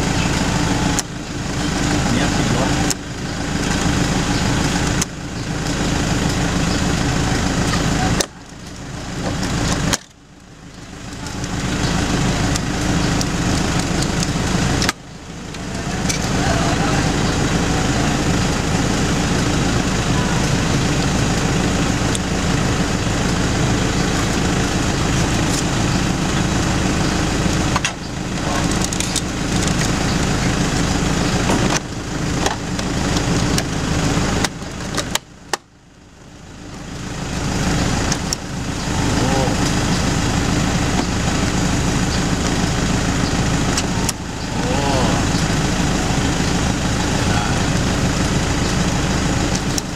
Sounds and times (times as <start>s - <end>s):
Speech: 2.1s - 2.9s, 15.7s - 17.3s, 39.1s - 39.7s, 44.6s - 45.4s.